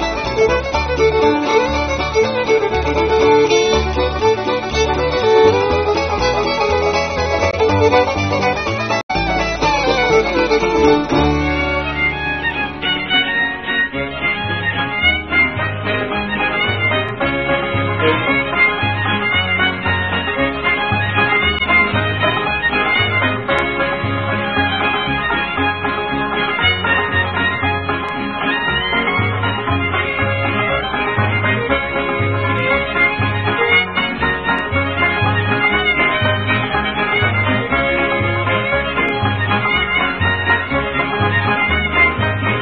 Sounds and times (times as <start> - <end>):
Violin, fiddle: 0.0 - 42.6.